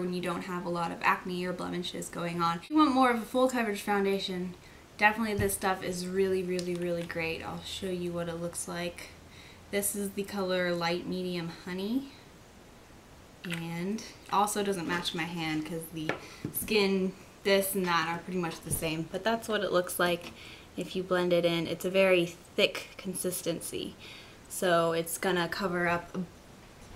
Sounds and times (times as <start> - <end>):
Speech: 0.0 - 9.2, 9.8 - 12.2, 13.5 - 26.3
Inside, small room: 0.0 - 26.9.